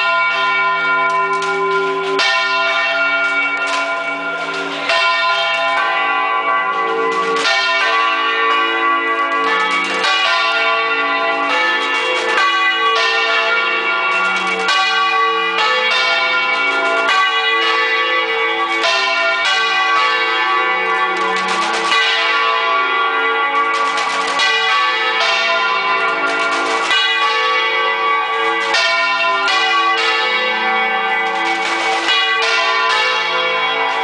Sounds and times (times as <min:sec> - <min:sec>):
Church bell: 0:00.0 - 0:34.0.